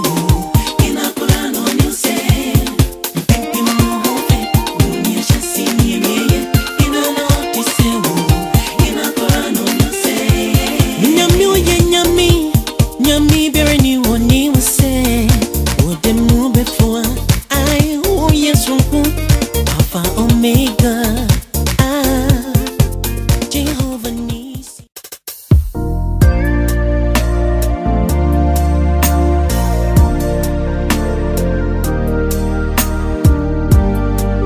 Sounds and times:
Gospel music: 0.0s - 24.3s, 26.2s - 34.4s.

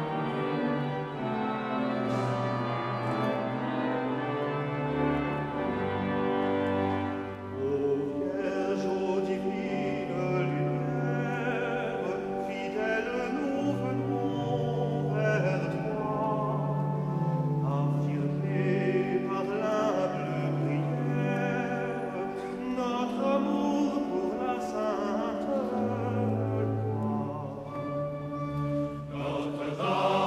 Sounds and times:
Music: 0.0s - 30.2s.

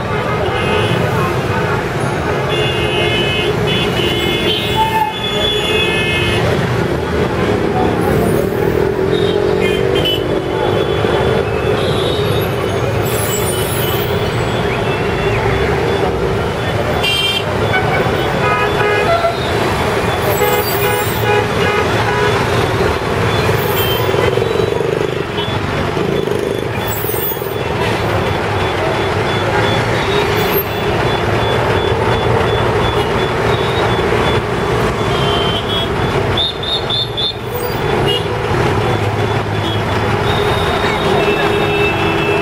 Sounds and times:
Bus: 0.0s - 2.7s, 3.4s - 42.4s.

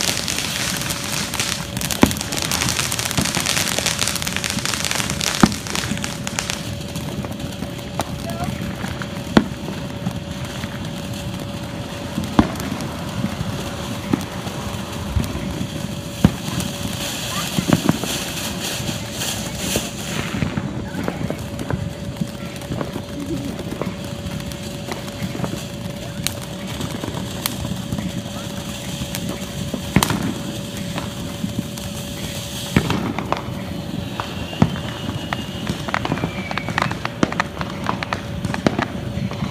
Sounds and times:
Firecracker: 0.0s - 39.5s.

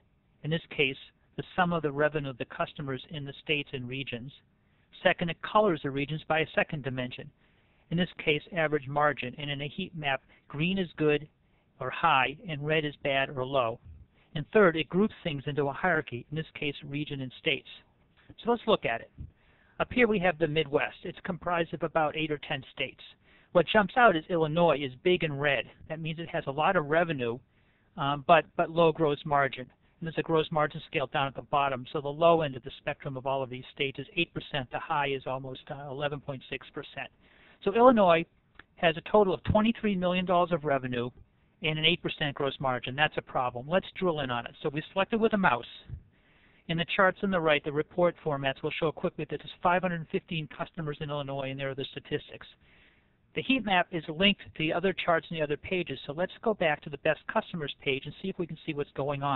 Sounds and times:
Speech: 0.4s - 4.4s, 5.0s - 7.3s, 7.9s - 27.4s, 28.0s - 46.0s, 46.7s - 52.6s, 53.3s - 59.3s.

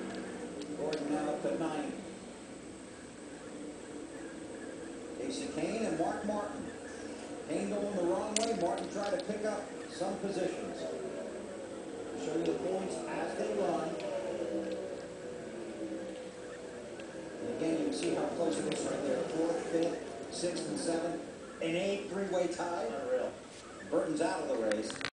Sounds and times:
Speech: 0.8s - 2.1s, 5.2s - 6.8s, 7.5s - 11.1s, 12.2s - 14.9s, 17.4s - 25.1s.

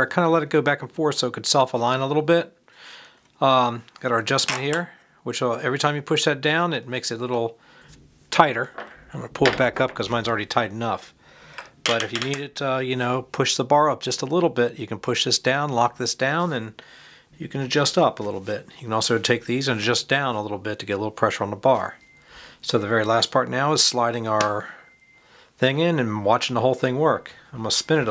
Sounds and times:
Speech: 0.0s - 2.6s, 3.4s - 7.6s, 8.3s - 11.1s, 11.9s - 16.8s, 17.4s - 22.0s, 22.6s - 24.8s, 25.6s - 28.1s.

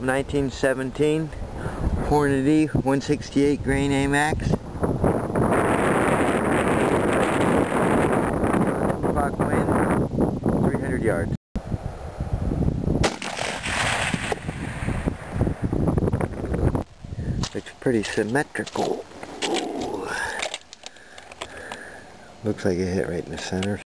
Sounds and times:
Speech: 0.0s - 1.3s, 2.0s - 4.6s, 9.2s - 9.7s, 10.7s - 11.4s, 17.5s - 20.4s, 22.4s - 23.8s.

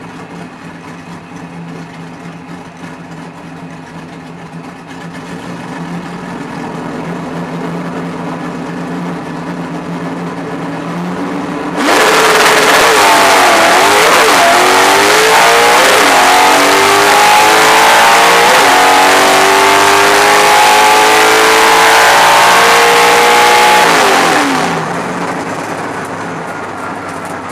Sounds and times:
Car: 0.0s - 27.5s.

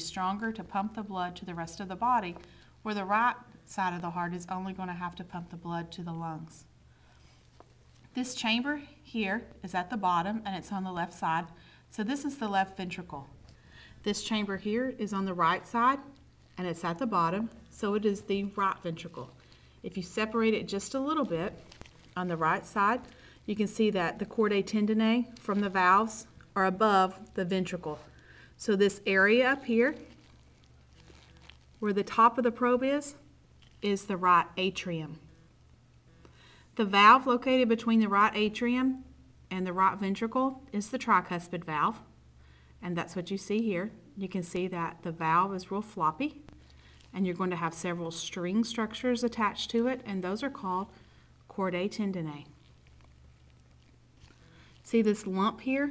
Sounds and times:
Speech: 0.0s - 6.7s, 8.2s - 13.3s, 14.0s - 30.2s, 31.8s - 35.2s, 36.8s - 42.1s, 42.8s - 46.5s, 47.1s - 52.6s, 54.8s - 55.9s.

